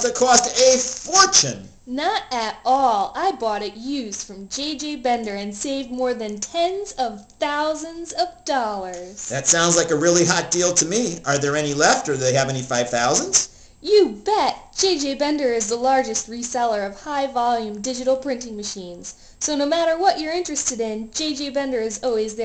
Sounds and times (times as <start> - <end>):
Speech: 0.0 - 22.4.